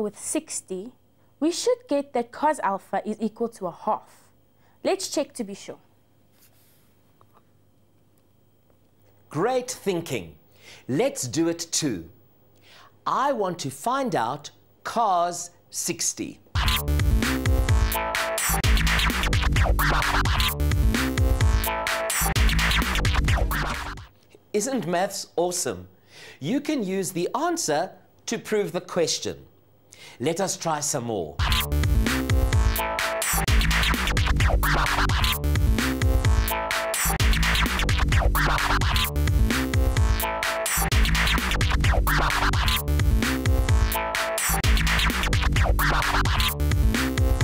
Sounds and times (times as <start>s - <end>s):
Scratching (performance technique): 16.6s - 24.1s, 31.4s - 47.4s.